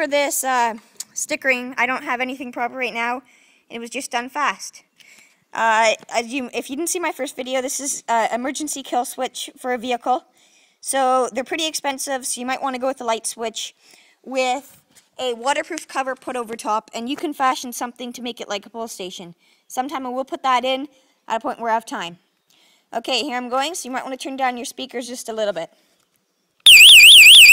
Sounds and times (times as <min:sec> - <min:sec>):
Speech: 0:00.0 - 0:04.9, 0:05.5 - 0:22.2, 0:22.9 - 0:25.8.